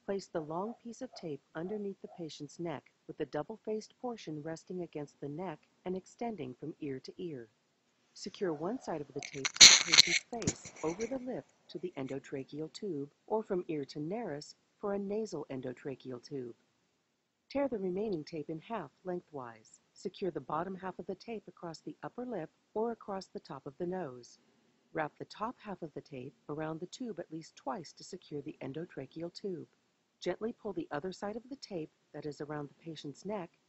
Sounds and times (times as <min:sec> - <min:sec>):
Narration, monologue: 0:00.0 - 0:33.6.